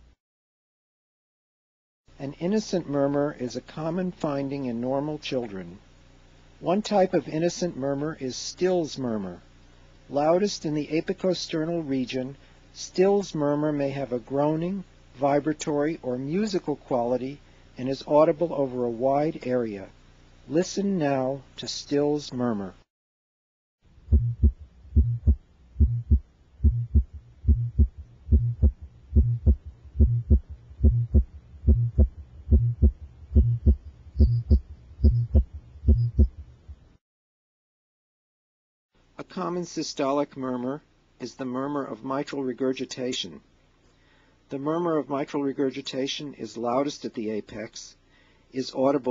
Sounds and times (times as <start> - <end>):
Hum: 23.9 - 37.0
Heart sounds, heartbeat: 24.1 - 36.4
Throbbing: 24.1 - 36.6.